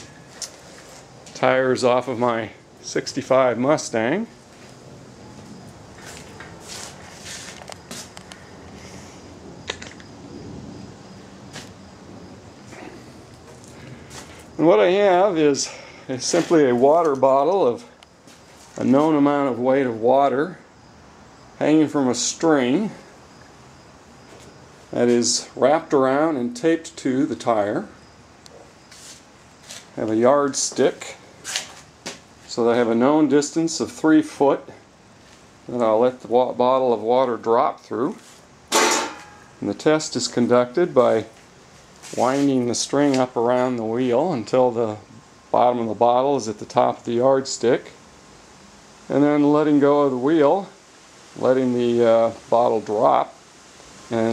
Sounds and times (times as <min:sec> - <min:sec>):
Speech: 0:01.4 - 0:04.4, 0:14.6 - 0:18.0, 0:18.8 - 0:20.7, 0:21.6 - 0:23.0, 0:24.9 - 0:28.0, 0:30.0 - 0:31.2, 0:32.5 - 0:34.8, 0:35.7 - 0:38.3, 0:39.6 - 0:41.4, 0:42.1 - 0:48.0, 0:49.1 - 0:50.8, 0:51.4 - 0:53.4, 0:54.1 - 0:54.3.